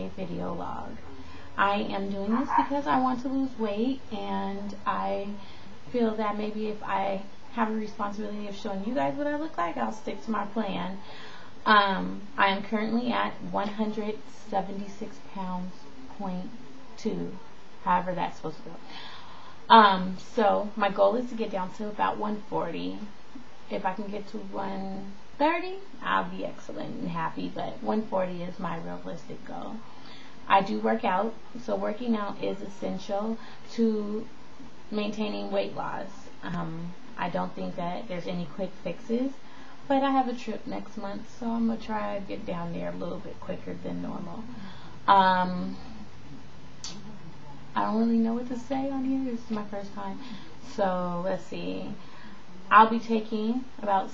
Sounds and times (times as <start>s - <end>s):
Speech: 0.0s - 11.0s, 11.6s - 18.9s, 19.7s - 23.1s, 23.7s - 29.8s, 30.4s - 34.3s, 34.9s - 46.1s, 46.8s - 52.0s, 52.7s - 54.1s.